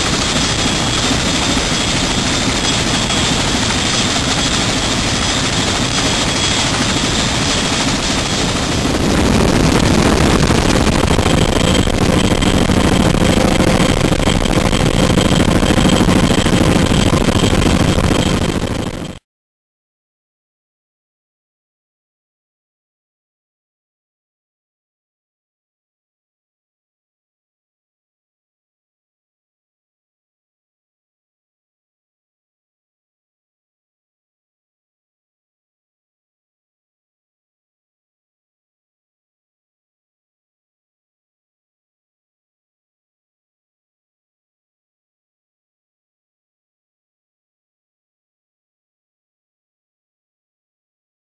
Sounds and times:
Helicopter: 0:00.0 - 0:19.3.

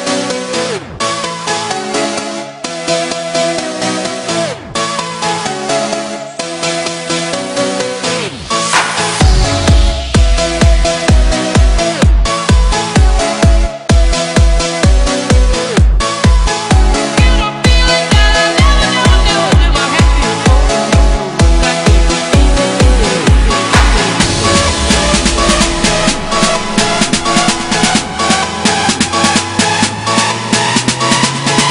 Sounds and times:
Dance music: 0:00.0 - 0:31.7
House music: 0:00.0 - 0:31.7.

